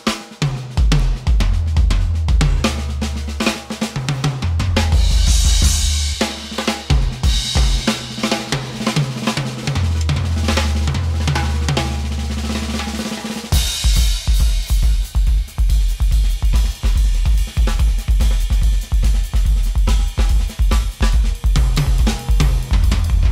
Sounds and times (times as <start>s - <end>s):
Cymbal: 0.0s - 23.3s
Snare drum: 0.0s - 23.3s
Bass drum: 0.4s - 13.0s, 13.6s - 23.3s.